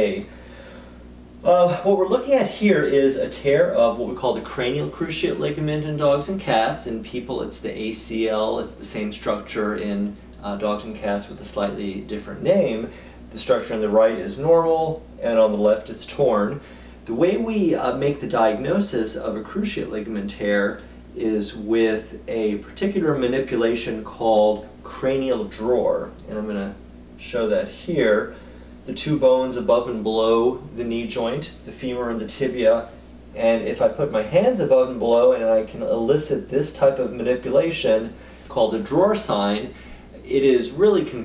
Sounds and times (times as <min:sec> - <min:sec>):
Speech: 0:00.0 - 0:00.3, 0:01.4 - 0:41.2.